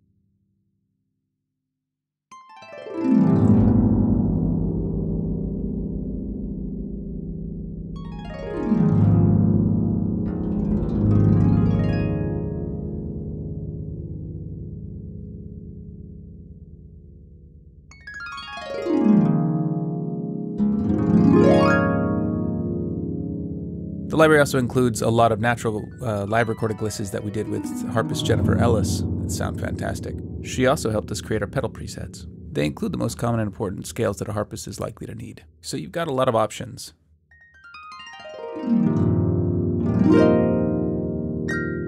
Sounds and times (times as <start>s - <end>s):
Keyboard (musical): 2.3s - 35.5s, 37.3s - 41.8s.